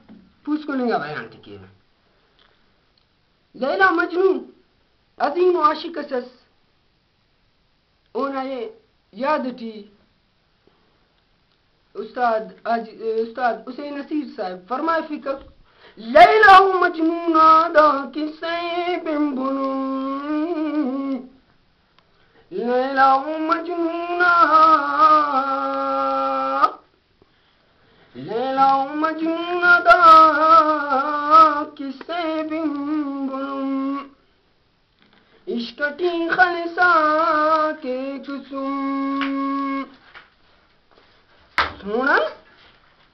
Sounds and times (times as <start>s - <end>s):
Inside, small room: 0.0s - 43.1s.